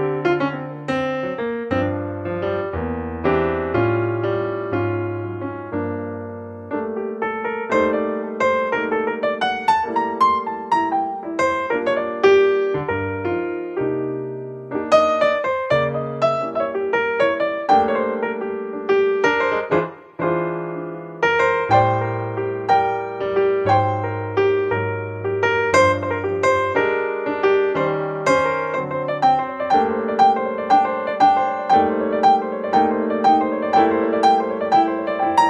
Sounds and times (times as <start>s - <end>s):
Electric piano: 0.0s - 35.4s.